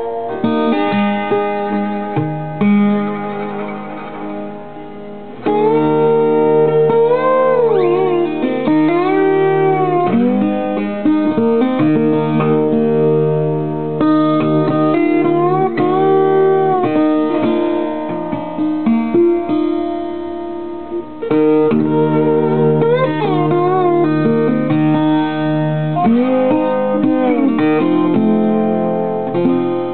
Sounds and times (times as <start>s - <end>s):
Bowed string instrument: 0.0s - 29.9s
Classical music: 0.0s - 29.9s
Guitar: 0.0s - 29.9s.